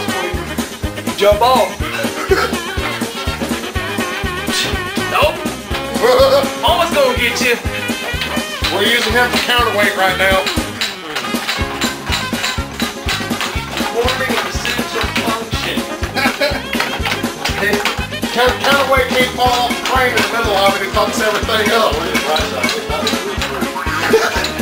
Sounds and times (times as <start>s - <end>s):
Music: 0.0s - 24.6s
Speech: 1.2s - 1.8s, 6.0s - 7.6s, 8.7s - 10.5s, 13.8s - 15.9s, 17.5s - 24.6s.